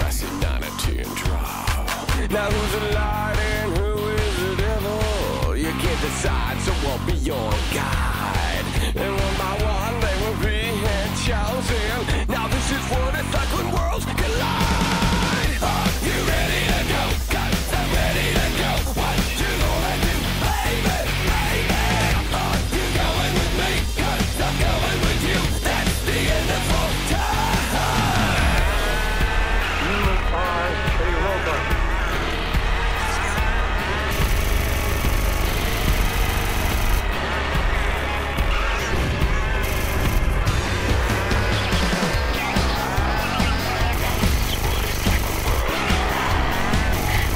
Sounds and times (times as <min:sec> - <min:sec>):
Music: 0:00.0 - 0:47.3.